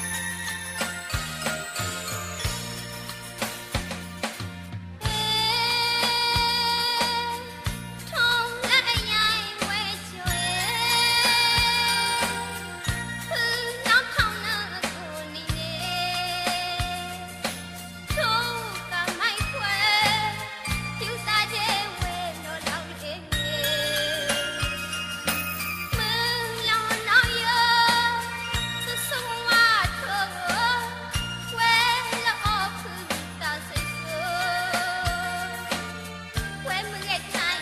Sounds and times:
Tender music: 0:00.0 - 0:37.6.

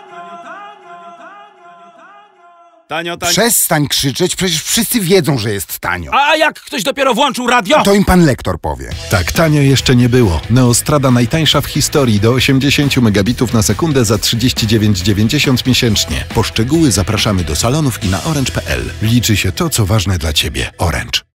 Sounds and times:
Music: 0:00.0 - 0:02.6, 0:08.8 - 0:21.3
Speech: 0:02.9 - 0:21.3.

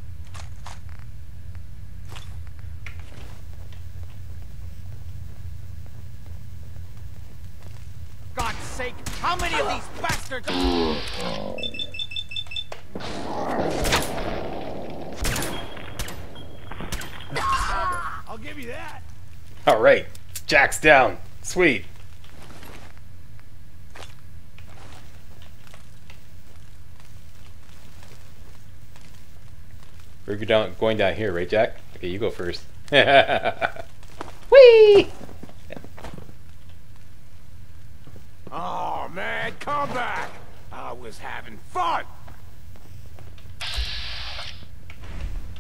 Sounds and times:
Speech: 0:08.4 - 0:10.9, 0:17.6 - 0:19.0, 0:30.3 - 0:32.7, 0:38.5 - 0:42.2.

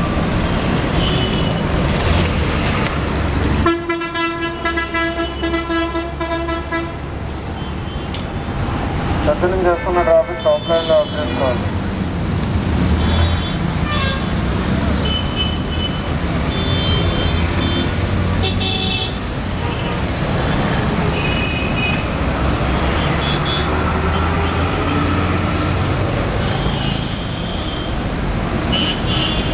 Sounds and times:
Speech: 0:09.2 - 0:11.6.

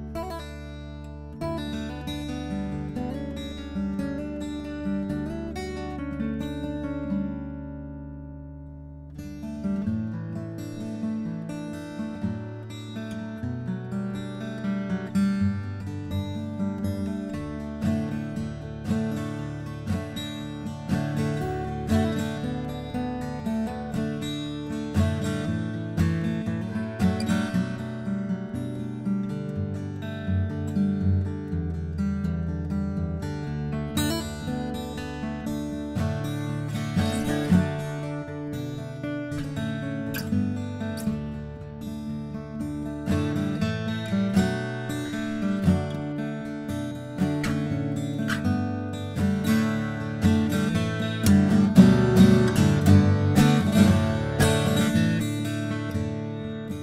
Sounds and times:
Acoustic guitar: 0:00.0 - 0:56.8.

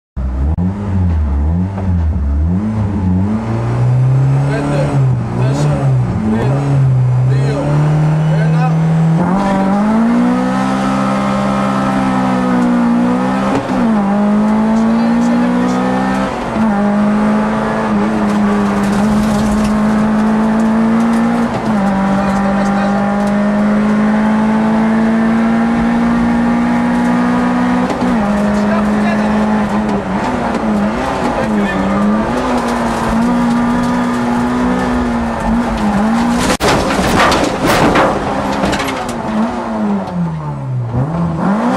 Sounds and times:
Car: 0:00.2 - 0:41.7
Speech: 0:04.5 - 0:06.7, 0:07.3 - 0:09.7, 0:14.6 - 0:16.1, 0:22.1 - 0:23.2, 0:28.6 - 0:29.5, 0:31.4 - 0:32.2.

